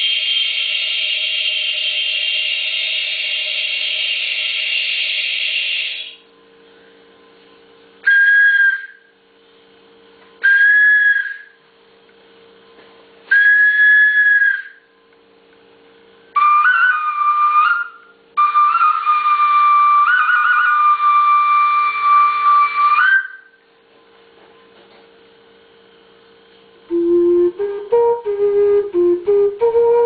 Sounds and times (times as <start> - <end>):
Flute: 8.0 - 9.1, 10.4 - 11.6, 13.3 - 14.9, 16.4 - 23.6, 26.9 - 30.0.